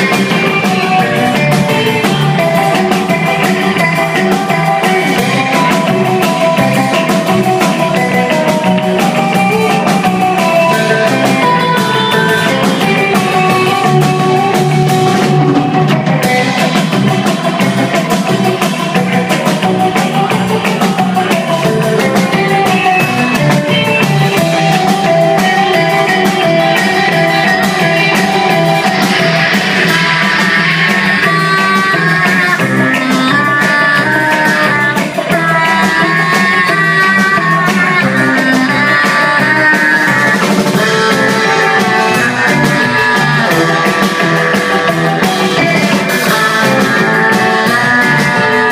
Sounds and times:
Musical instrument: 0.0s - 48.7s.

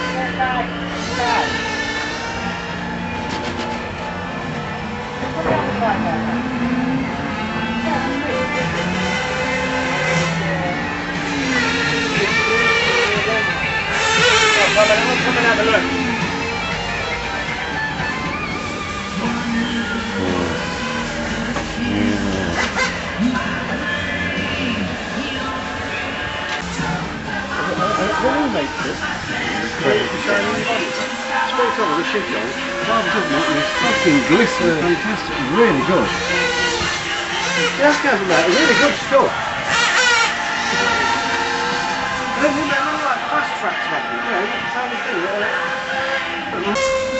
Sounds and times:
Music: 0.0s - 47.1s.

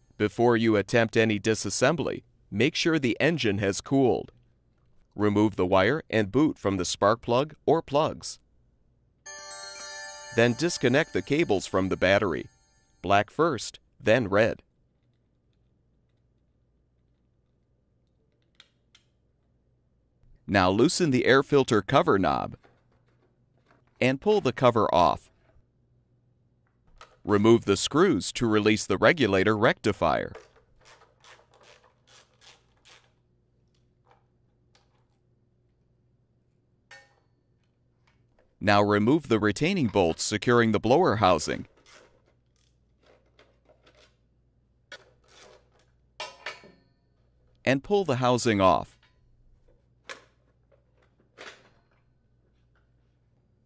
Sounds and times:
Speech: 0.2s - 4.3s, 5.2s - 8.4s, 10.4s - 14.6s, 20.5s - 22.6s, 24.0s - 25.3s, 27.3s - 30.4s, 38.6s - 41.7s, 47.7s - 49.0s.

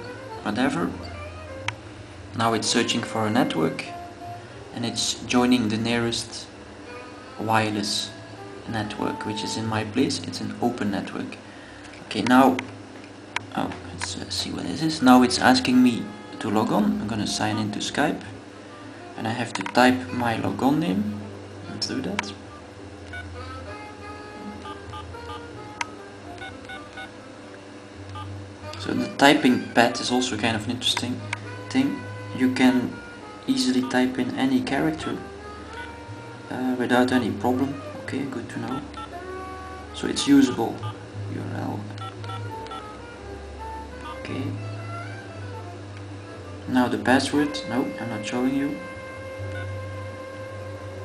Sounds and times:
Music: 0.0s - 51.0s
Speech: 0.4s - 1.0s, 2.4s - 3.9s, 4.8s - 6.5s, 7.4s - 11.4s, 12.1s - 12.7s, 13.5s - 18.4s, 19.2s - 21.1s, 21.7s - 22.4s, 28.8s - 35.2s, 36.5s - 38.9s, 40.0s - 41.9s, 44.2s - 44.6s, 46.7s - 48.9s.

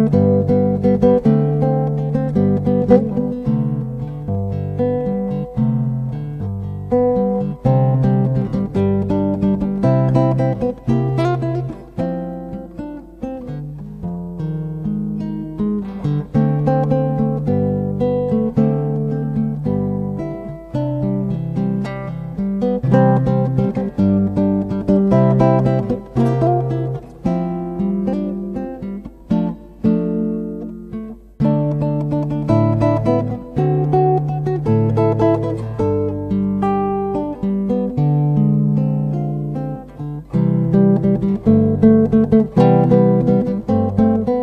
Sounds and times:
Guitar: 0.0s - 44.4s.

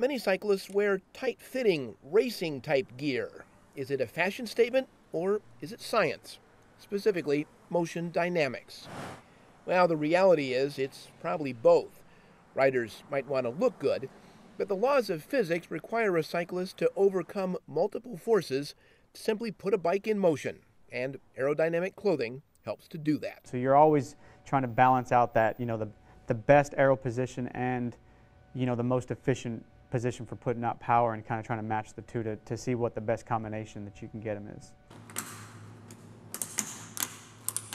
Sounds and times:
Speech: 0.0s - 8.9s, 9.7s - 12.0s, 12.6s - 28.0s, 28.6s - 34.8s.

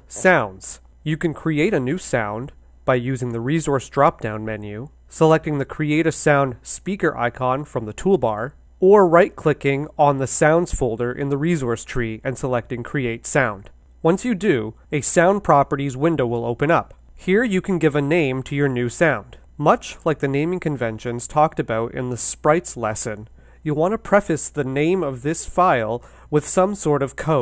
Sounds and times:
Speech: 0.1s - 27.4s.

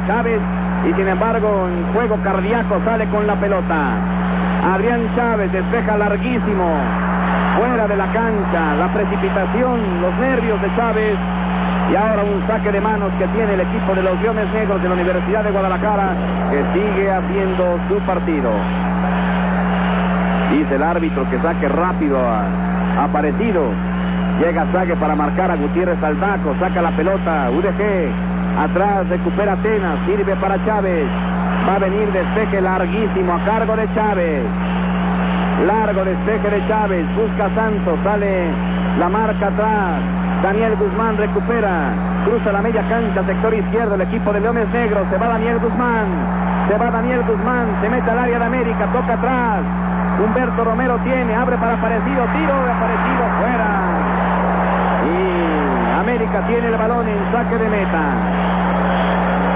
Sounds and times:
Speech: 0.0s - 6.9s, 7.6s - 11.2s, 11.9s - 18.6s, 20.5s - 23.8s, 24.4s - 34.6s, 35.6s - 54.1s, 55.0s - 58.2s.

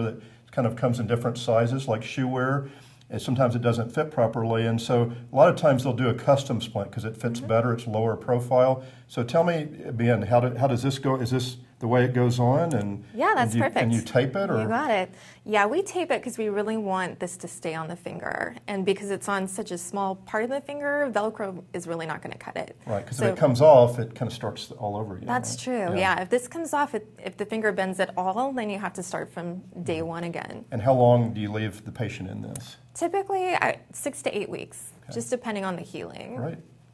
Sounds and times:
Speech: 0.0s - 36.6s.

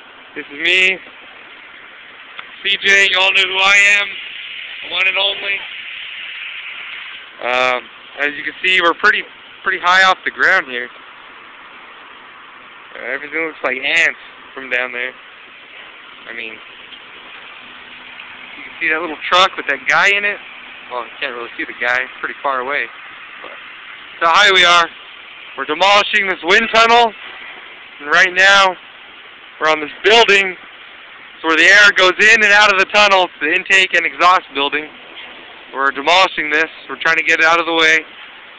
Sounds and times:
Speech: 0.4s - 1.0s, 2.6s - 4.2s, 4.8s - 5.7s, 7.4s - 10.9s, 12.9s - 15.2s, 16.2s - 16.6s, 18.6s - 23.6s, 24.2s - 24.9s, 25.6s - 27.2s, 28.0s - 28.8s, 29.6s - 30.6s, 31.4s - 34.9s, 35.7s - 38.1s.

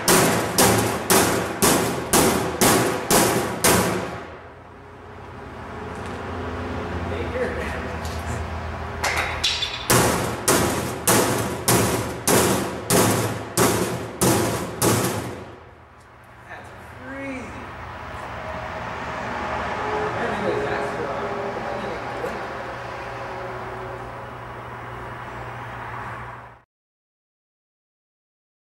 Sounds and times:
Speech: 7.1s - 8.0s, 16.5s - 17.7s, 20.1s - 22.4s.

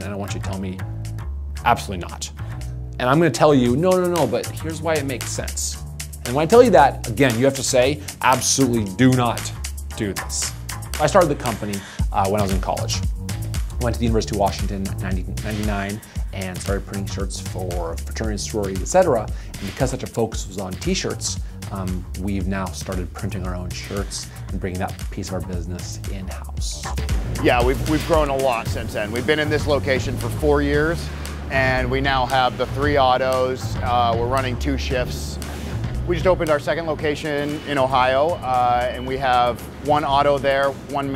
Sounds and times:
Speech: 0.0s - 0.8s, 1.6s - 2.4s, 3.0s - 13.0s, 13.8s - 35.4s, 36.1s - 41.1s
Music: 0.0s - 41.1s.

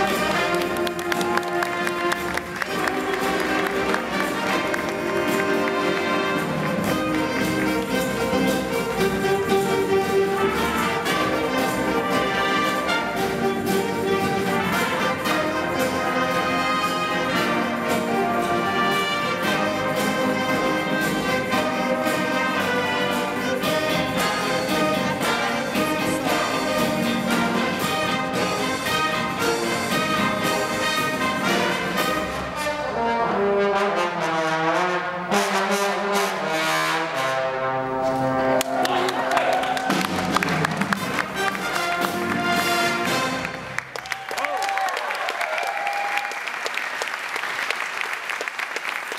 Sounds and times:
Trombone: 0.0s - 43.9s
Trumpet: 0.0s - 46.4s.

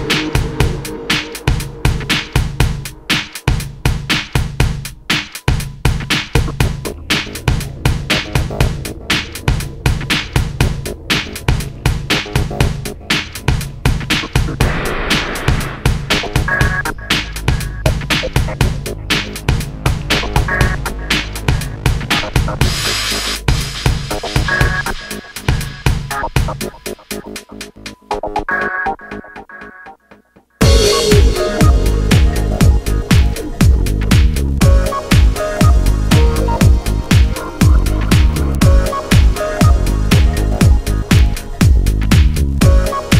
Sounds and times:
Music: 0.0s - 43.1s.

